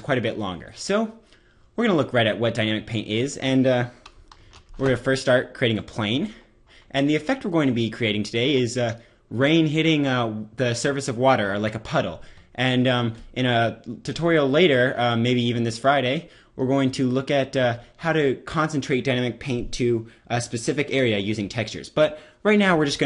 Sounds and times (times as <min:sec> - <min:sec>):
Speech: 0:00.0 - 0:01.2, 0:01.8 - 0:04.0, 0:04.8 - 0:23.0.